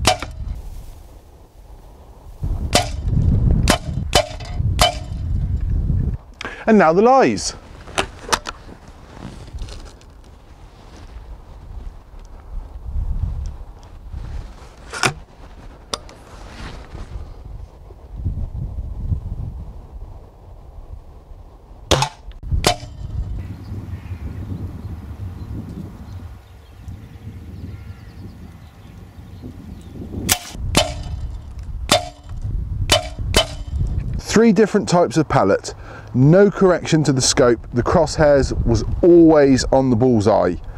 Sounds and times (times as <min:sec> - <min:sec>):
Outside, rural or natural: 0:00.0 - 0:40.7
Speech: 0:06.6 - 0:07.6, 0:34.2 - 0:40.6.